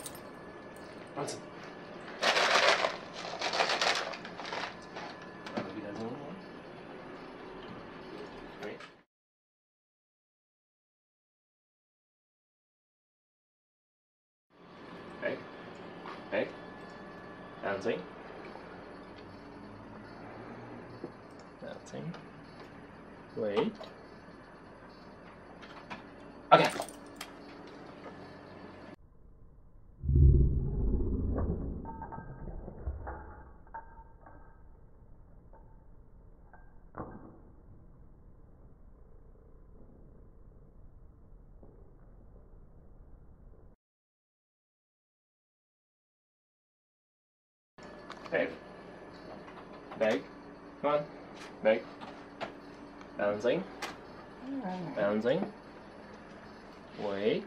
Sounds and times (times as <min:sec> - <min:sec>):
Speech: 0:05.6 - 0:06.4, 0:15.2 - 0:15.5, 0:17.6 - 0:18.1, 0:23.4 - 0:23.8, 0:53.2 - 0:53.7, 0:57.0 - 0:57.4.